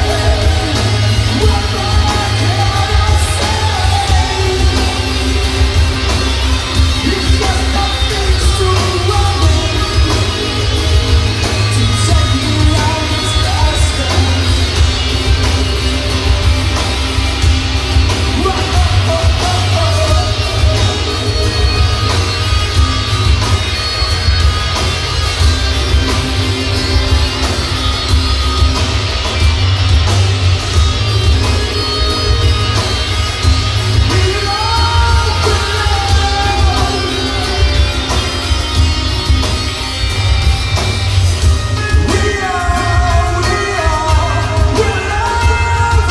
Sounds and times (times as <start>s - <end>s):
Singing: 0.0s - 17.0s, 31.4s - 39.1s, 41.6s - 46.1s
Inside, public space: 0.0s - 46.1s
Music: 0.0s - 46.1s.